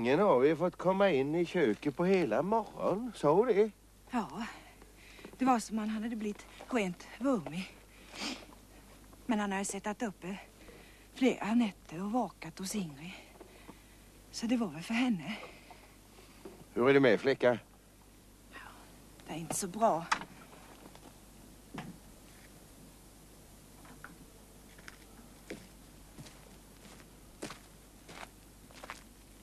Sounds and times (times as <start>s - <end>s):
Speech: 19.3s - 20.1s.